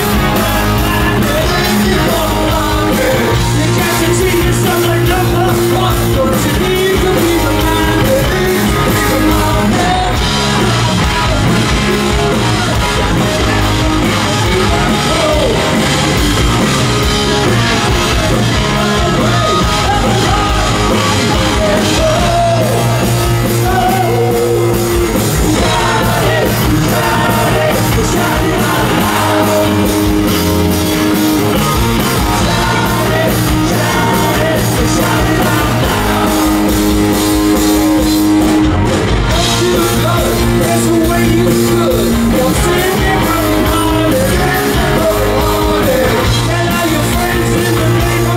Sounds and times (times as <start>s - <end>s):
Music: 0.0s - 48.3s.